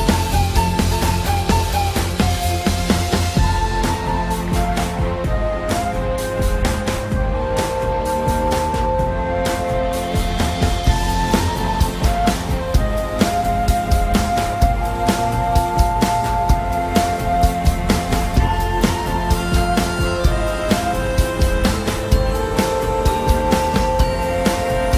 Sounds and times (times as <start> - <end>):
Background music: 0.0 - 24.9.